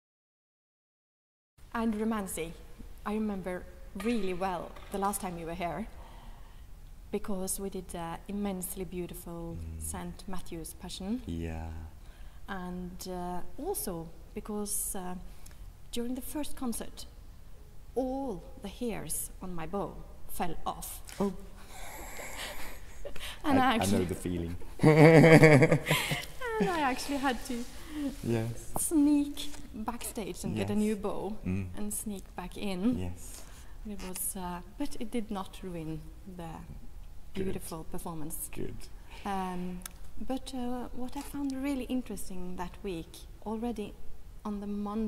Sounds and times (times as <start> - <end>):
Speech: 7.2 - 11.9, 23.5 - 24.6, 26.4 - 33.2, 37.4 - 43.9.